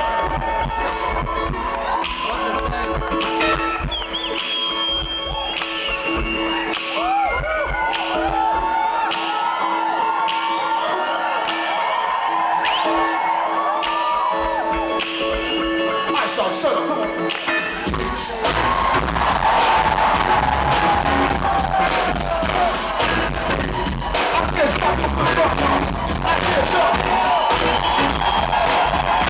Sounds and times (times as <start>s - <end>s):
Music: 0.0s - 29.2s.